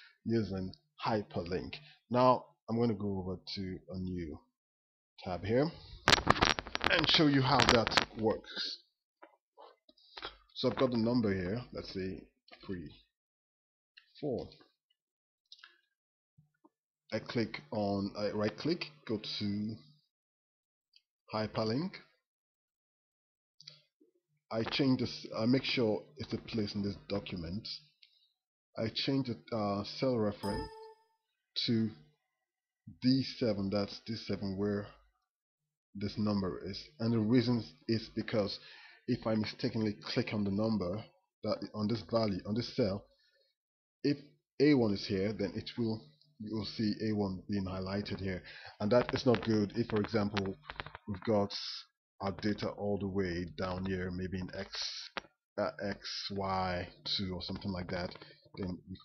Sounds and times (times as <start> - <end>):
Speech: 0.0 - 4.4, 5.2 - 5.8, 6.9 - 8.9, 10.2 - 13.0, 14.0 - 14.6, 17.1 - 19.9, 21.3 - 22.1, 24.5 - 28.0, 28.8 - 30.9, 31.6 - 32.0, 32.9 - 35.0, 36.0 - 43.1, 44.1 - 59.0.